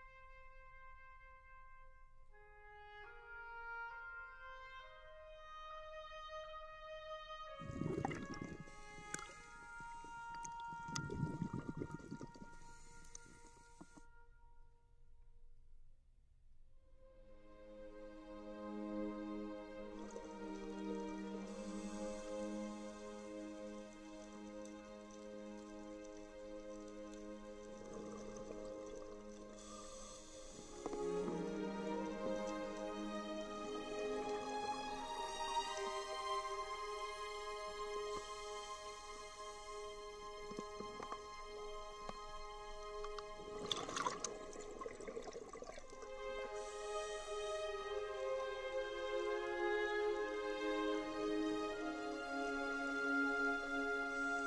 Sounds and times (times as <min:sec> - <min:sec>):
Music: 0:00.0 - 0:15.9, 0:16.5 - 0:54.4.